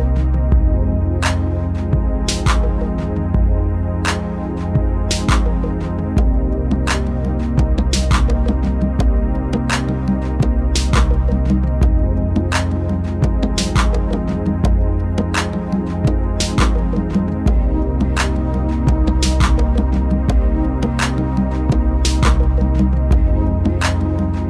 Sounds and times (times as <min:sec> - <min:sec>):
Music: 0:00.0 - 0:24.4.